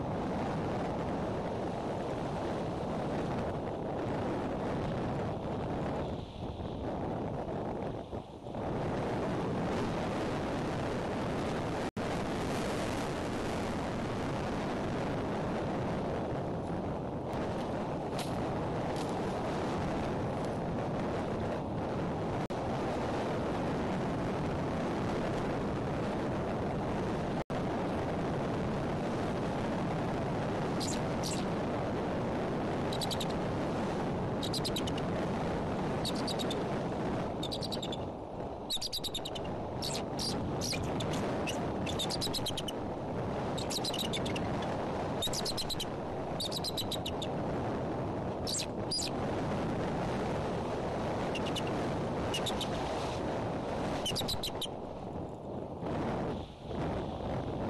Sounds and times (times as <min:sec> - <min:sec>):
Wind noise (microphone): 0:00.0 - 0:57.6.